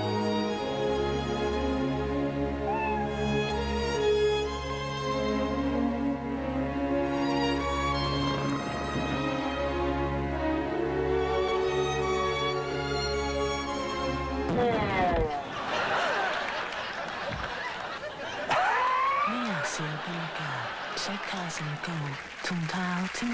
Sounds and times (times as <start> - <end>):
Music: 0.0 - 15.2.